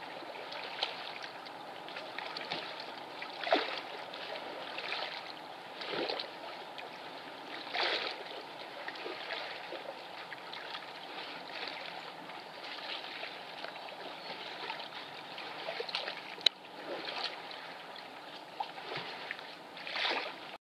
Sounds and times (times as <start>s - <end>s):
Boat, Water vehicle: 0.0s - 20.6s.